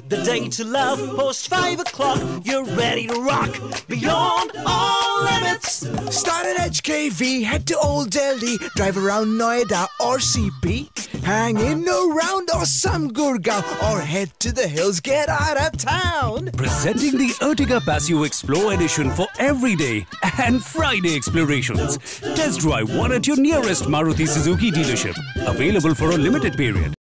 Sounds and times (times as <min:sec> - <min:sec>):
Music: 0:00.0 - 0:27.0
Speech: 0:07.4 - 0:27.0.